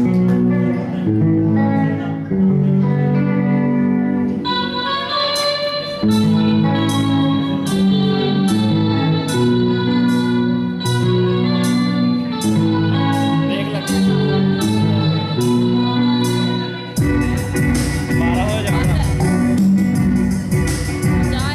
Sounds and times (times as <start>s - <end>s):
Acoustic guitar: 0.0s - 21.5s.